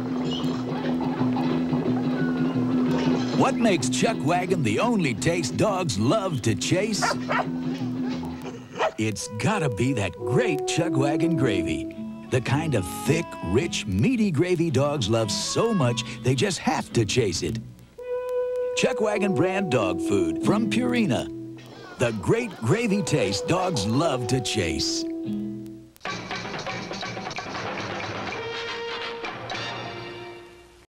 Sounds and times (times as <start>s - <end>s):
Music: 0.0s - 30.8s
Speech: 3.4s - 7.2s, 9.0s - 17.6s, 18.8s - 25.1s.